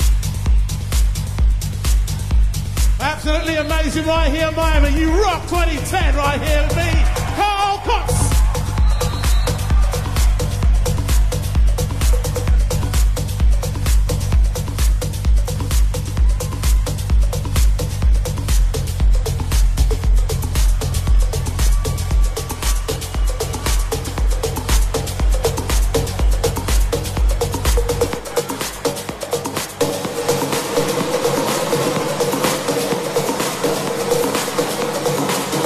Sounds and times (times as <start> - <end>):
Exciting music: 0.0 - 35.6
Soundtrack music: 0.0 - 35.6
Speech: 3.0 - 8.3.